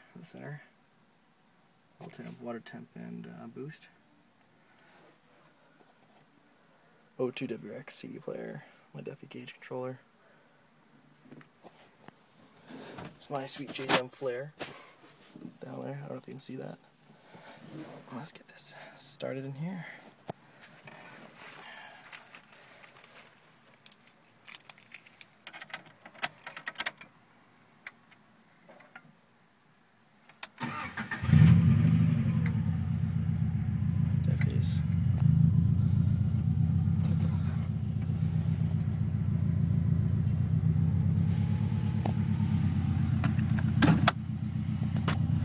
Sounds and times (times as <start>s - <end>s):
Speech: 0.1s - 0.8s, 2.0s - 4.0s, 7.2s - 10.1s, 13.2s - 14.6s, 15.4s - 16.9s, 18.0s - 20.0s, 34.2s - 35.0s
Outside, urban or manmade: 19.7s - 45.4s
Car: 30.7s - 45.4s.